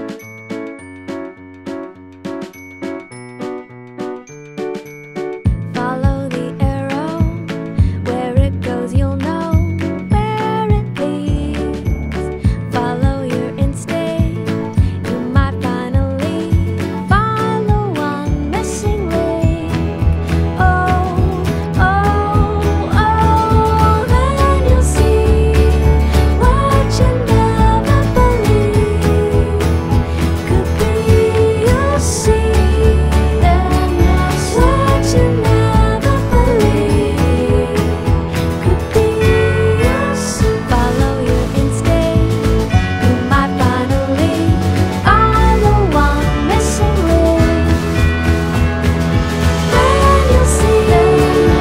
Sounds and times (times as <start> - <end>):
Music: 0.0 - 51.6.